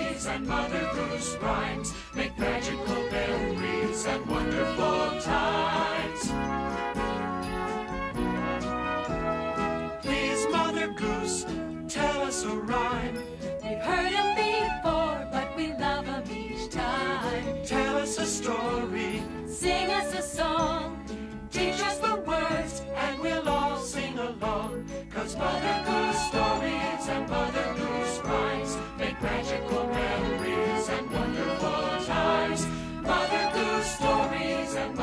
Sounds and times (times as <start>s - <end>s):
Music: 0.0s - 35.0s.